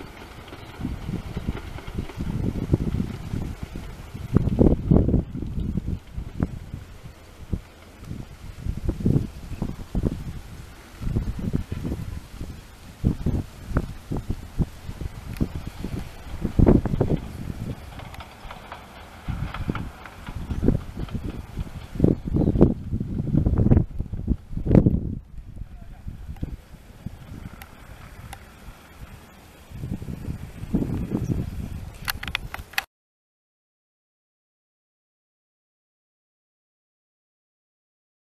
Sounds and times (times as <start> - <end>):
Train: 0.0 - 24.7
Railroad car, train wagon: 0.0 - 32.8
Clickety-clack: 17.1 - 22.0.